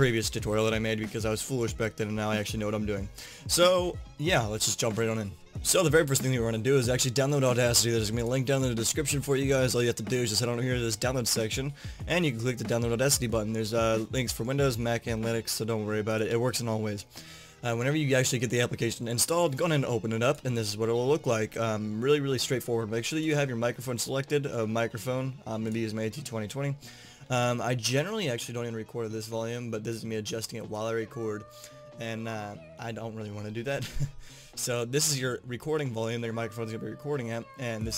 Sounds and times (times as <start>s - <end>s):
Speech: 0.0s - 17.0s, 17.6s - 33.8s, 34.6s - 37.9s.